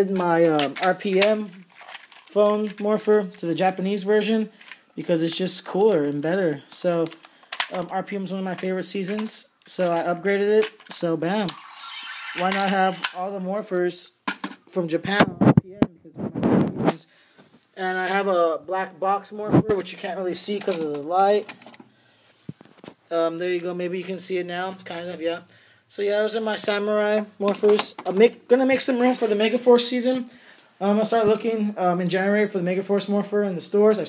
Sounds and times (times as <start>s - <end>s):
Speech: 0.0s - 1.6s, 2.3s - 11.6s, 12.4s - 16.2s, 17.8s - 21.5s, 23.1s - 34.0s.